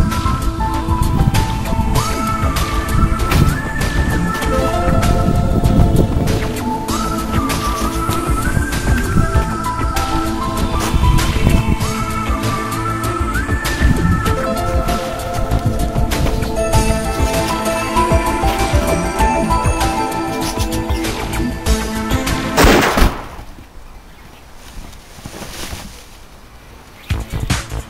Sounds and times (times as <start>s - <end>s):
Music: 0.0s - 22.8s, 27.0s - 27.8s
Gunshot, gunfire: 22.6s - 23.4s.